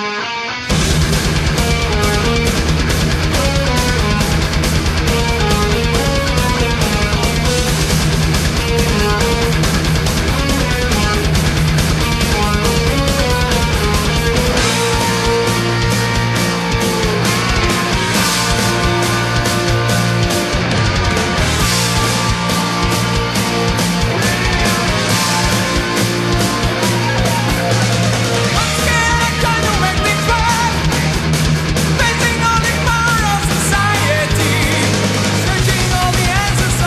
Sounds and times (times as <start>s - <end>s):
Music: 0.0s - 36.8s.